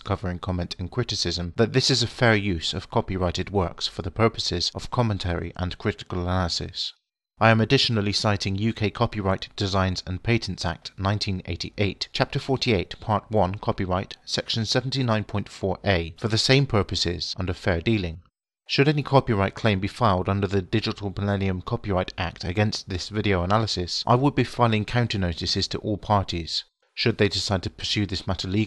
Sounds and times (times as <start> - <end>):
Speech: 0.0 - 28.6.